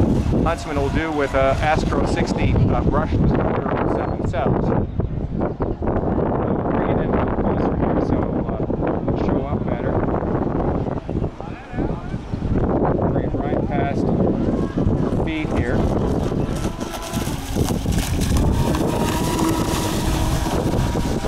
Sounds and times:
Motorboat, speedboat: 0.0 - 3.8, 13.8 - 21.2
Sailboat, sailing ship: 0.0 - 21.2
Speech: 0.5 - 4.8, 6.7 - 10.0, 13.1 - 14.1
Ship: 10.7 - 21.2.

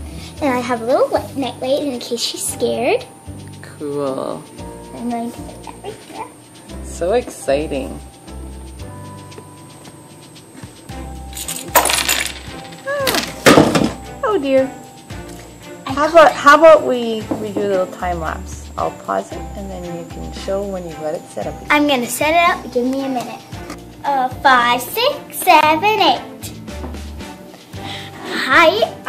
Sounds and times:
Music: 0.0 - 29.0.

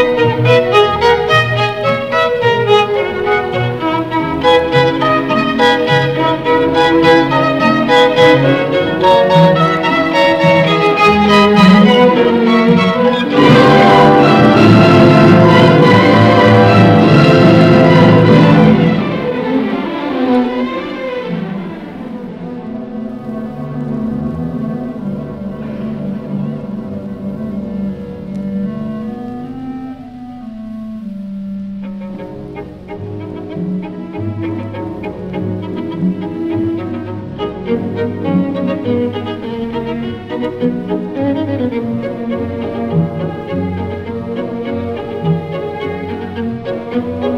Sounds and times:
Orchestra: 0.0 - 47.3
Violin, fiddle: 0.0 - 47.3.

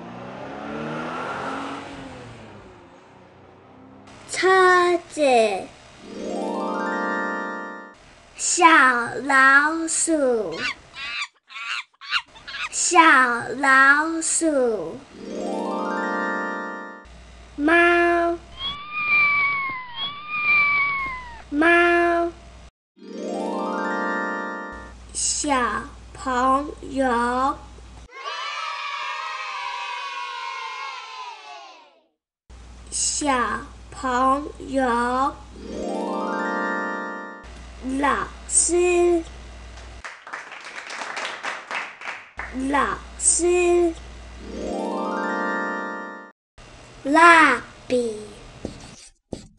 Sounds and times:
Speech: 4.3 - 5.7, 8.4 - 10.7, 12.7 - 15.0, 17.6 - 18.4, 21.5 - 22.4, 25.2 - 28.3, 32.9 - 35.4, 37.8 - 39.3, 42.5 - 44.0, 47.0 - 48.4
Bird: 10.6 - 12.8, 18.6 - 21.5.

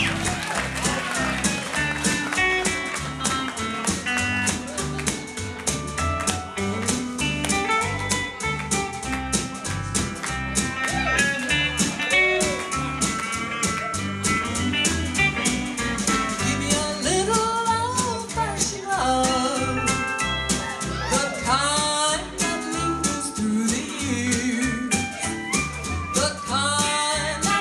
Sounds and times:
Independent music: 0.0 - 27.6.

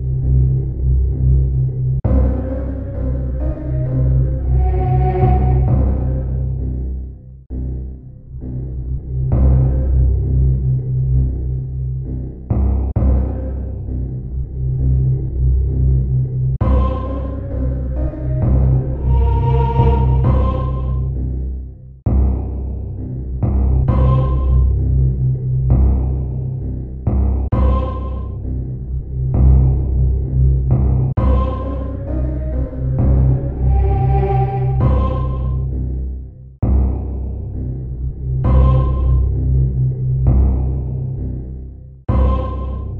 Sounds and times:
Background music: 0.0 - 26.9, 27.5 - 43.0.

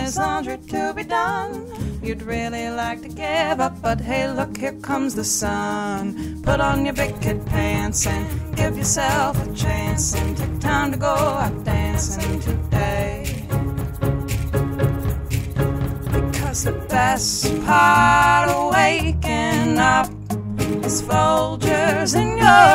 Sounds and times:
Music: 0.0 - 22.7.

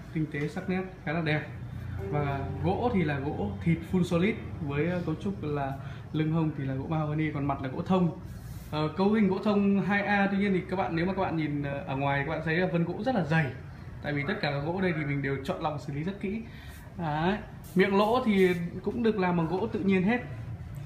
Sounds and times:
Speech: 0.0 - 20.4.

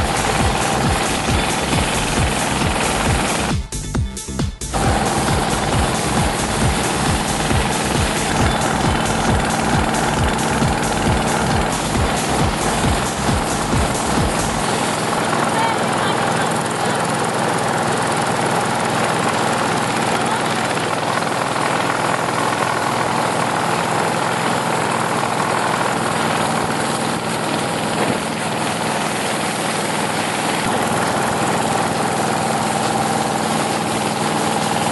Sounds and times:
Helicopter: 0.0 - 3.6, 4.8 - 34.9.

